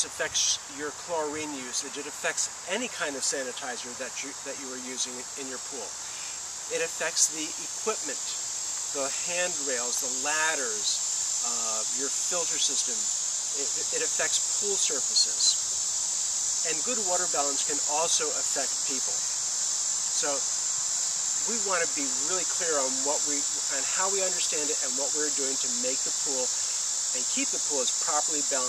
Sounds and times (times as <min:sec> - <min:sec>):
Speech: 0:00.0 - 0:06.0, 0:06.7 - 0:08.4, 0:09.0 - 0:15.6, 0:16.7 - 0:19.2, 0:20.2 - 0:20.4, 0:21.4 - 0:26.6, 0:27.2 - 0:28.6.